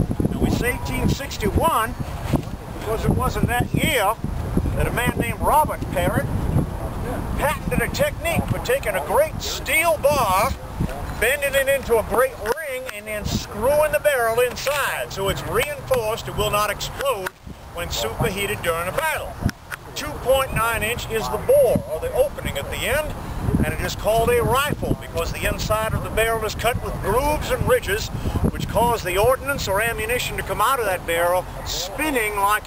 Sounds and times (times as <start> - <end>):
Speech: 0.3 - 2.0, 2.8 - 4.2, 4.8 - 6.3, 7.1 - 32.6.